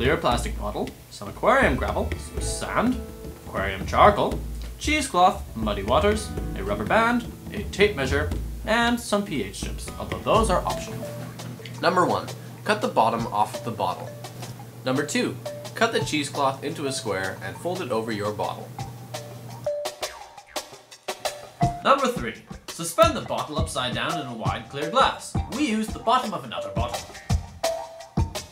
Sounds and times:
Speech: 0.0s - 11.1s, 11.8s - 14.1s, 14.9s - 18.7s, 21.8s - 27.1s
Music: 0.0s - 28.5s.

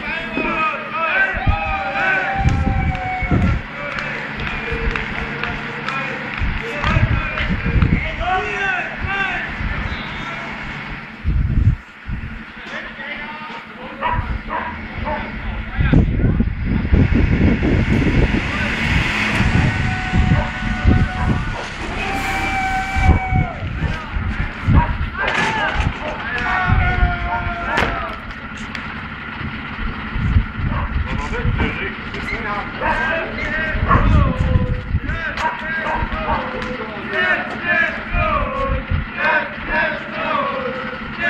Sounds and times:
Speech: 0.0s - 2.8s, 3.4s - 10.6s, 12.6s - 14.4s, 15.0s - 16.5s, 23.8s - 24.4s, 25.2s - 28.3s, 31.1s - 41.2s
Truck: 0.0s - 41.2s.

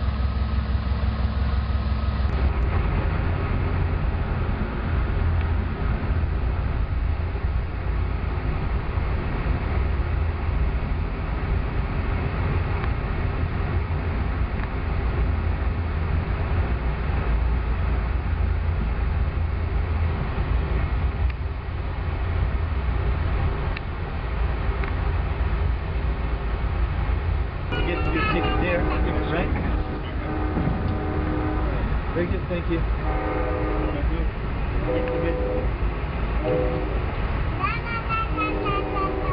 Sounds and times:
Outside, urban or manmade: 0.0s - 39.3s
Railroad car, train wagon: 0.0s - 39.3s
Train: 0.0s - 39.3s
Speech: 27.8s - 30.3s, 32.2s - 32.9s.

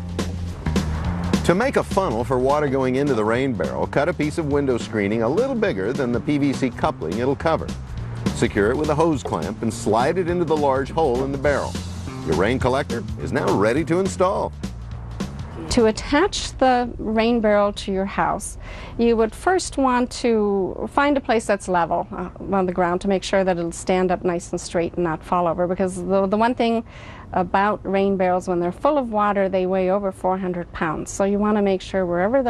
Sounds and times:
Speech: 1.5s - 7.7s, 8.4s - 14.5s, 27.4s - 32.5s.

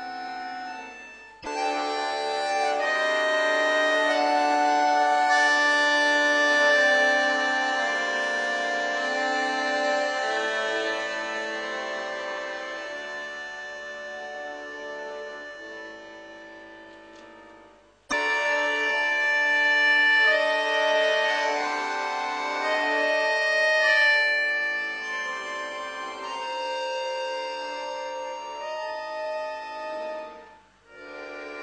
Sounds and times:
Accordion: 0.0s - 31.6s.

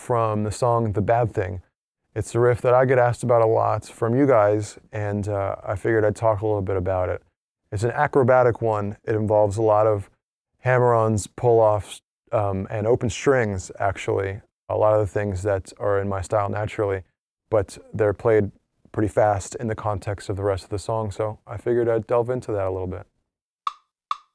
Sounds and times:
Speech: 0.0s - 23.1s.

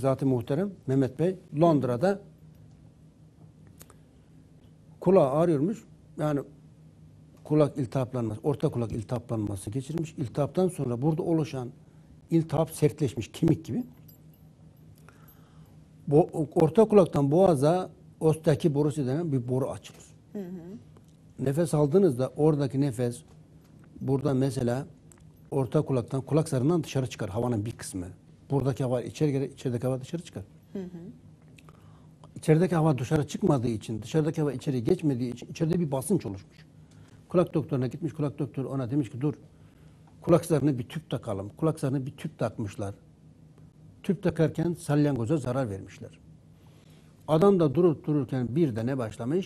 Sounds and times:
Speech: 0.0s - 2.3s, 5.0s - 6.5s, 7.5s - 13.9s, 16.1s - 20.8s, 21.4s - 23.3s, 24.0s - 24.9s, 25.6s - 31.2s, 32.4s - 36.5s, 37.3s - 39.4s, 40.2s - 43.0s, 44.0s - 46.2s, 47.3s - 49.4s.

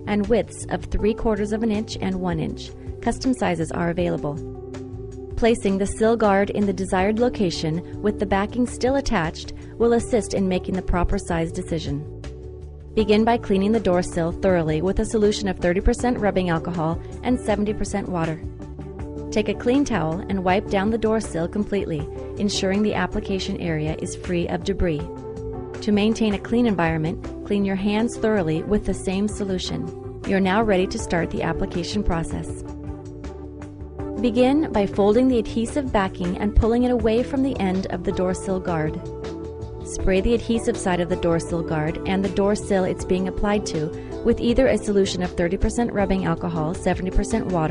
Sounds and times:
Music: 0.0s - 47.7s
Speech: 0.1s - 4.4s, 5.4s - 12.1s, 13.0s - 18.4s, 19.4s - 25.1s, 25.8s - 32.6s, 34.2s - 39.0s, 39.9s - 47.7s.

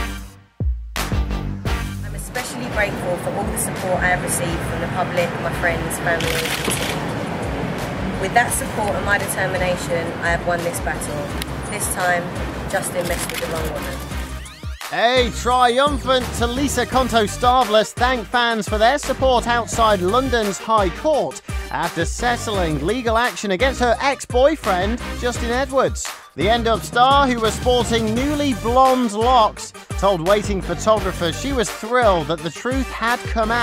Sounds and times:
Music: 0.0s - 33.6s
Speech: 2.1s - 6.6s, 8.2s - 14.0s, 14.9s - 33.6s.

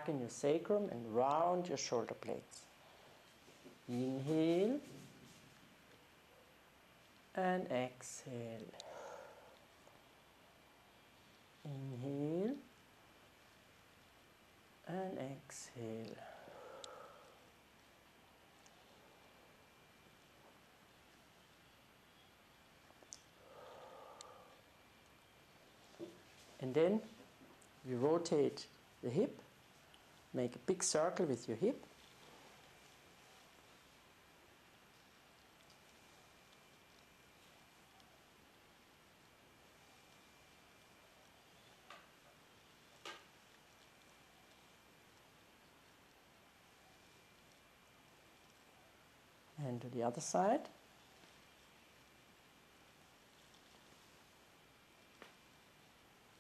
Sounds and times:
Speech: 0.0s - 2.7s, 3.9s - 5.0s, 7.4s - 8.8s, 11.6s - 12.7s, 14.9s - 16.3s, 26.6s - 27.2s, 27.8s - 29.5s, 30.4s - 31.9s, 49.6s - 50.8s.

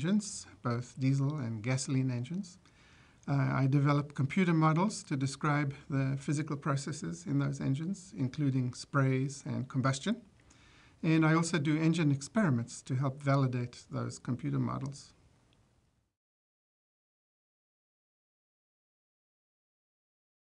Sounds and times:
Speech: 0.0s - 2.6s, 3.3s - 10.3s, 11.0s - 15.2s.

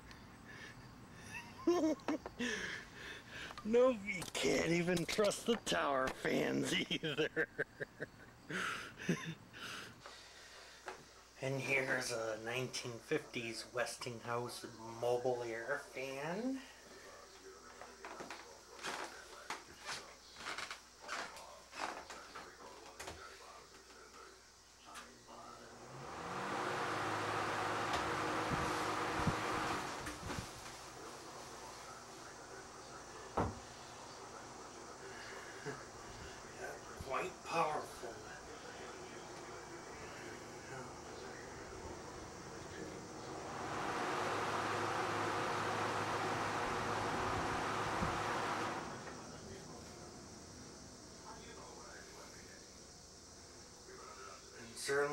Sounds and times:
Mechanical fan: 25.3s - 55.1s.

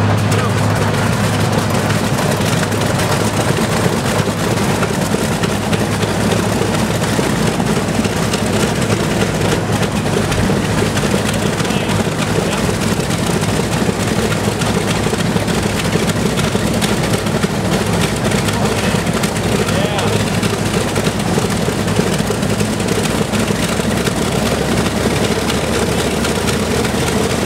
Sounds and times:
Heavy engine (low frequency): 0.0s - 27.4s
Speech: 0.2s - 0.6s, 11.5s - 12.7s, 18.6s - 20.3s.

